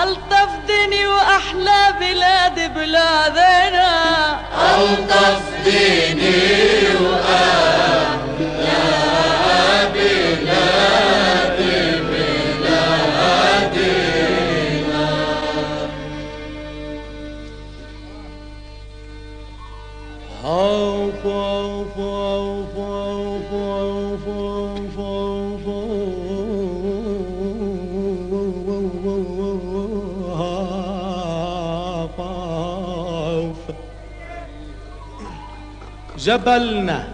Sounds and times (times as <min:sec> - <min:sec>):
Middle Eastern music: 0:00.0 - 0:37.1.